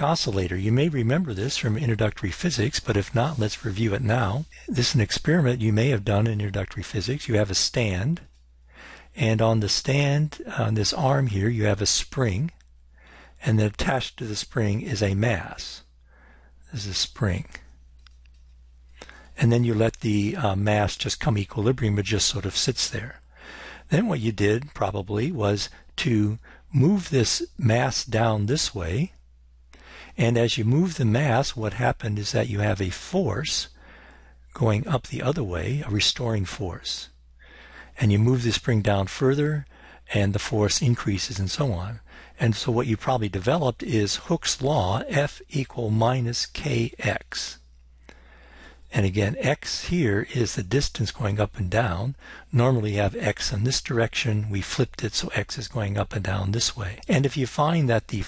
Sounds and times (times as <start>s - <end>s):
Speech: 0.0s - 8.3s, 9.1s - 12.6s, 13.4s - 15.9s, 16.7s - 17.7s, 19.0s - 29.2s, 30.1s - 33.8s, 34.5s - 37.2s, 37.9s - 47.6s, 48.9s - 58.2s.